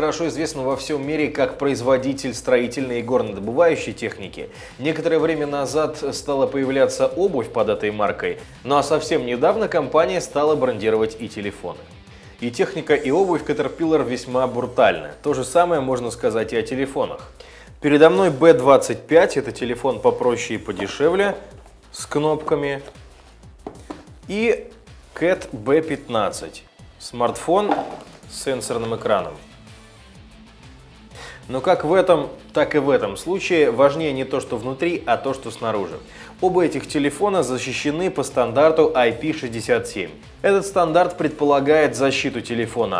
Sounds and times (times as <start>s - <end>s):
Speech: 0.0s - 11.8s, 12.4s - 23.0s, 24.3s - 29.4s, 31.5s - 43.0s
Music: 0.0s - 43.0s.